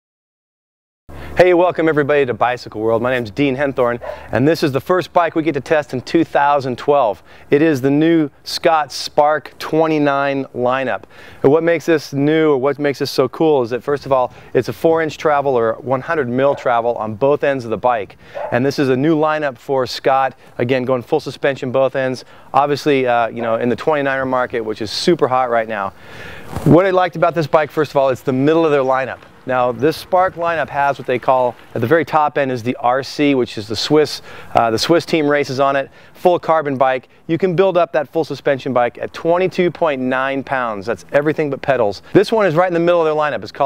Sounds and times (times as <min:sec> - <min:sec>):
Speech: 0:01.4 - 0:26.0, 0:26.6 - 0:43.6.